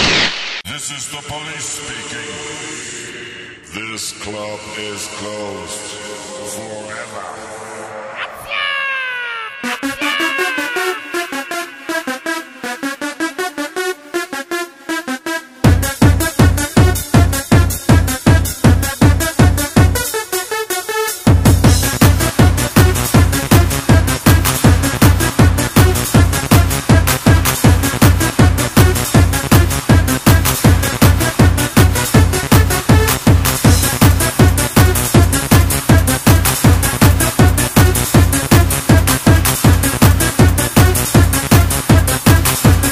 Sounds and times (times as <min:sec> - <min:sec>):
Music: 0:01.9 - 0:08.5, 0:09.1 - 0:42.9.